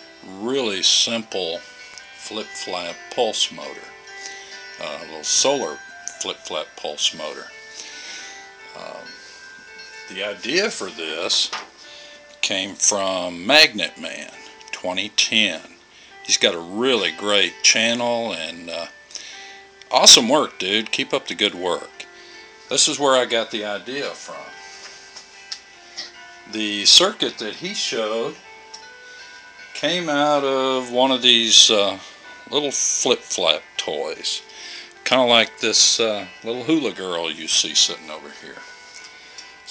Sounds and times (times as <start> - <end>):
Music: 0.0 - 39.7
Speech: 0.3 - 1.6, 2.2 - 3.9, 4.8 - 7.5, 8.8 - 9.2, 10.1 - 11.5, 12.4 - 18.9, 19.9 - 22.0, 22.7 - 24.5, 26.5 - 28.4, 29.8 - 34.4, 35.0 - 38.6.